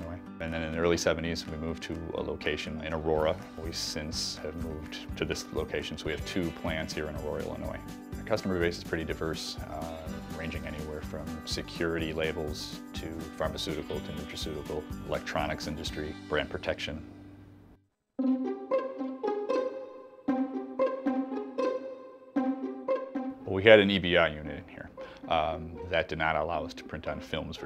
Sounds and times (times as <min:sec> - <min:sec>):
Speech: 0:00.0 - 0:17.1, 0:23.4 - 0:27.6
Music: 0:00.0 - 0:27.6.